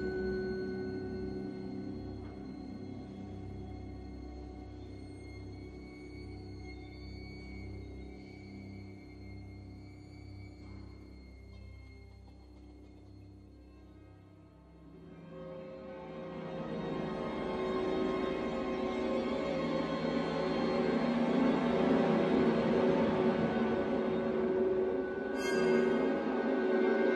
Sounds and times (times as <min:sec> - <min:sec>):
Music: 0:00.0 - 0:27.1.